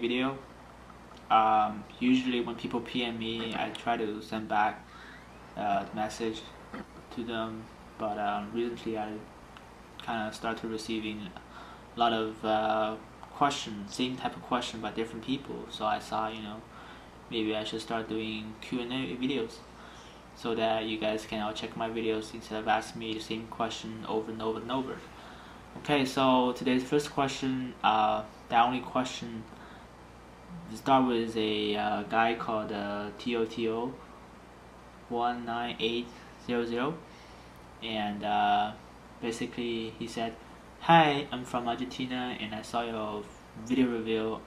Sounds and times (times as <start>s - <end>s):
Speech: 0.0s - 0.5s, 1.2s - 4.9s, 5.6s - 9.3s, 10.0s - 16.7s, 17.3s - 19.7s, 20.4s - 25.1s, 25.8s - 29.6s, 30.5s - 34.0s, 35.1s - 37.1s, 37.8s - 44.4s.